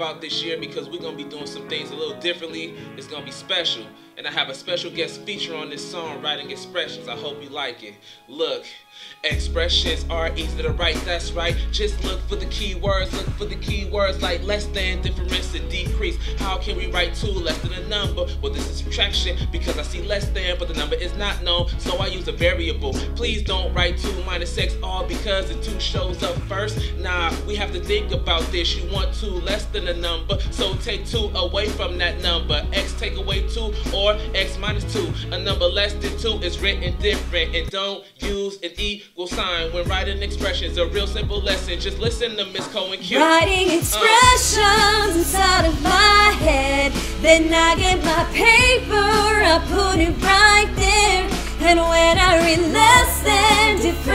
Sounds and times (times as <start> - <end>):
Music: 0.0 - 54.1.